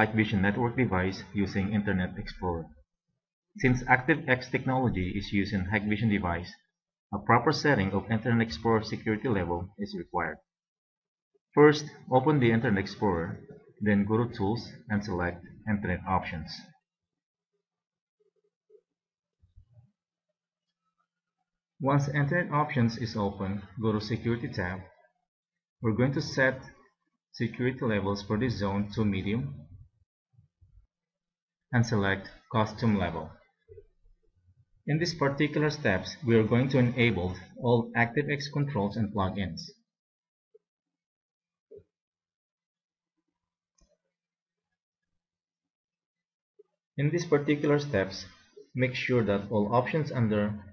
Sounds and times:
Speech: 0.0s - 2.8s, 3.6s - 10.5s, 11.6s - 16.8s, 21.8s - 25.1s, 25.8s - 26.8s, 27.4s - 29.8s, 31.8s - 33.5s, 34.9s - 39.9s, 47.0s - 50.7s.

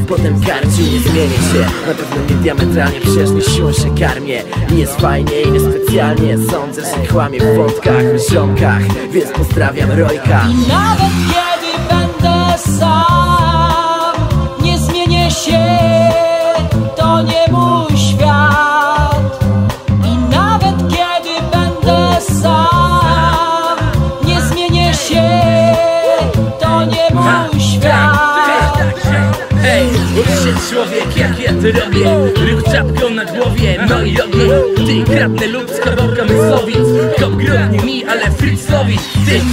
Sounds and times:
Music: 0.0s - 39.5s.

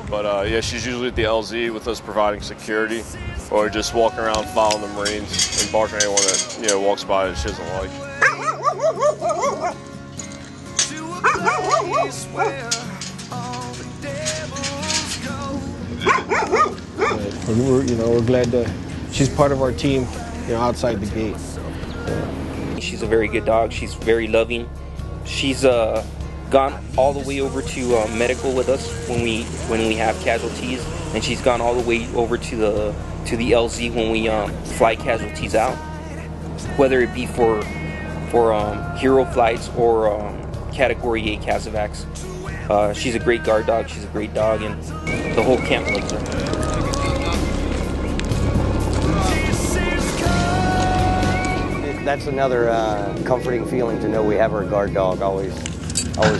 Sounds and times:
Speech: 0.0s - 8.0s, 17.1s - 24.7s, 25.3s - 35.8s, 36.8s - 37.7s, 38.3s - 42.0s, 42.7s - 44.8s, 45.4s - 46.3s, 51.8s - 55.6s
Music: 0.0s - 56.3s
Bow-wow: 8.2s - 9.8s, 11.2s - 12.6s, 16.0s - 17.3s.

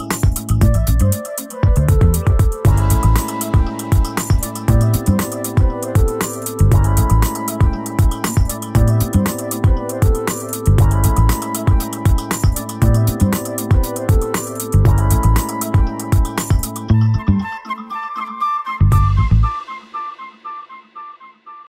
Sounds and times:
Music: 0.0s - 21.7s.

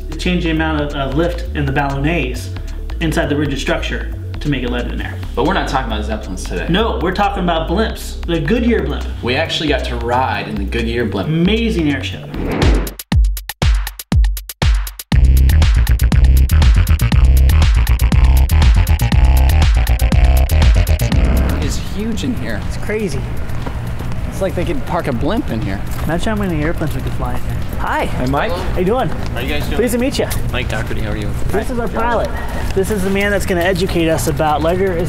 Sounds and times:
Drum machine: 12.6s - 23.6s, 28.8s - 35.0s.

